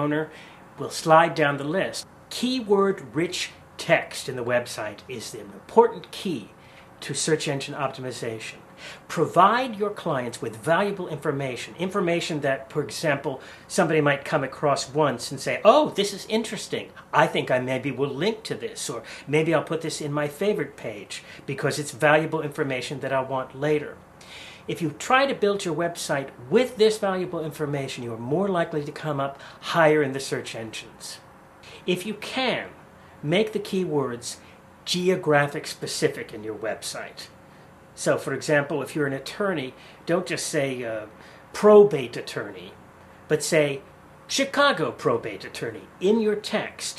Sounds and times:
Speech: 0:00.0 - 0:24.0, 0:24.6 - 0:37.4, 0:38.0 - 0:46.9.

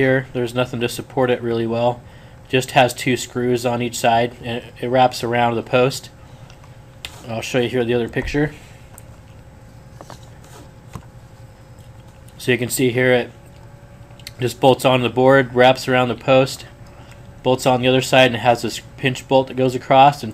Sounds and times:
Speech: 0:00.0 - 0:06.2, 0:07.2 - 0:08.6, 0:12.4 - 0:13.4, 0:14.3 - 0:16.7, 0:17.5 - 0:20.3.

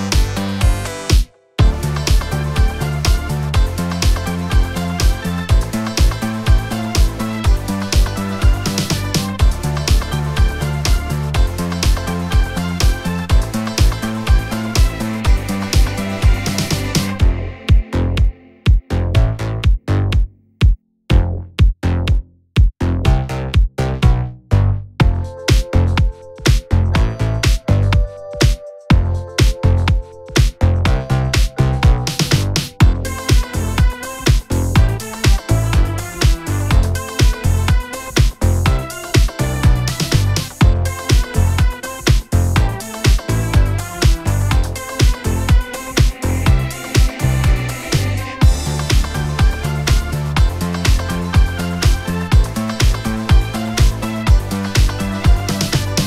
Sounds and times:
Music: 0:00.0 - 0:56.0.

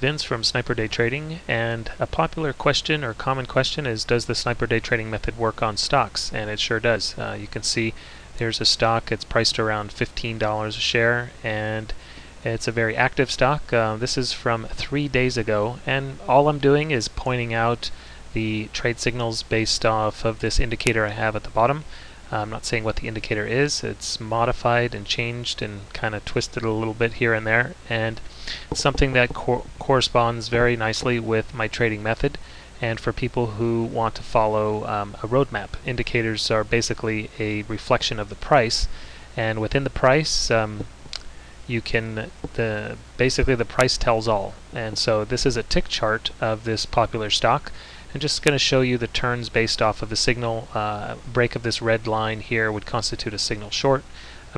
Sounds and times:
Speech: 0:00.0 - 0:54.5.

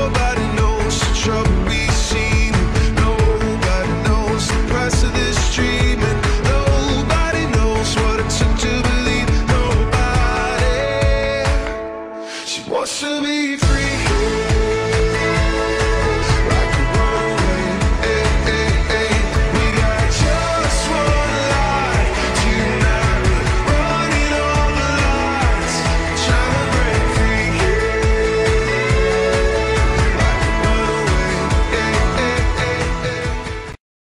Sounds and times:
Music: 0:00.0 - 0:33.8.

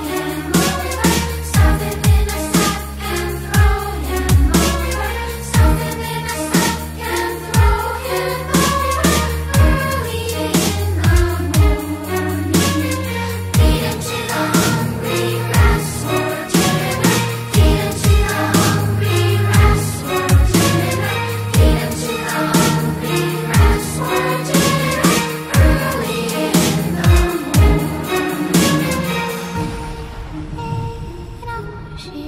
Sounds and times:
Dubstep: 0:00.0 - 0:32.2.

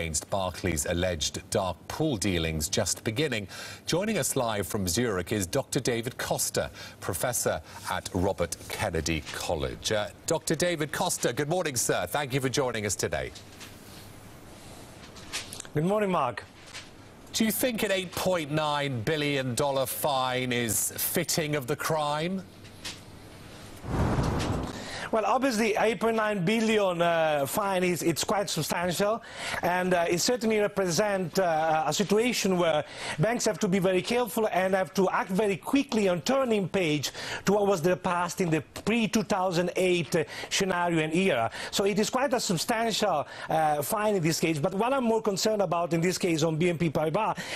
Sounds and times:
Speech: 0:00.0 - 0:13.4, 0:15.8 - 0:16.5, 0:17.3 - 0:22.5, 0:25.1 - 0:47.4.

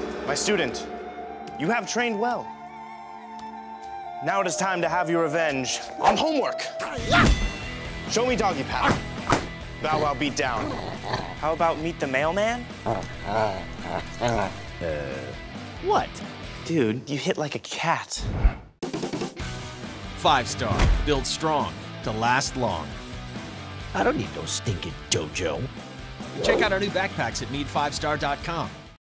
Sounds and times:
Music: 0:00.0 - 0:17.3, 0:18.8 - 0:29.0
Speech: 0:09.8 - 0:10.8, 0:14.3 - 0:18.2, 0:20.2 - 0:22.9, 0:24.0 - 0:25.7, 0:26.4 - 0:28.8.

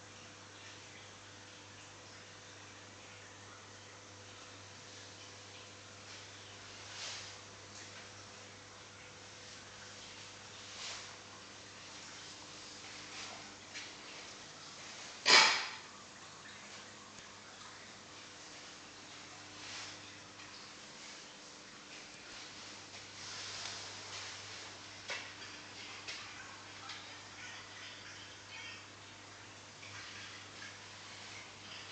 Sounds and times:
Bathtub (filling or washing): 0:00.0 - 0:31.9.

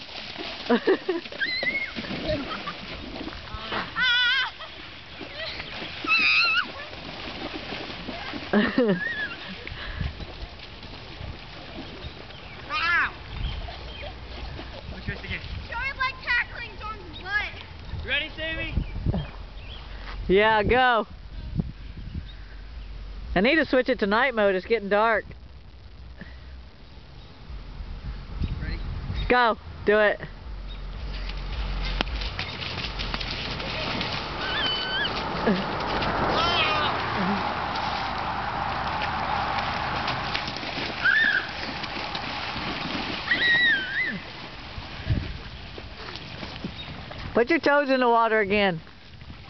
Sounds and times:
Stream: 0:00.0 - 0:49.5.

